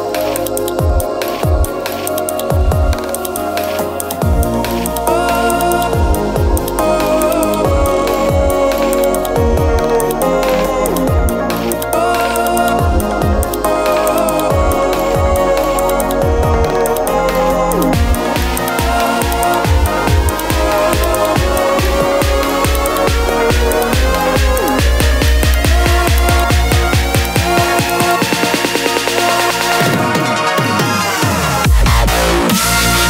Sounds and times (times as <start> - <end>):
Dubstep: 0.0 - 33.0.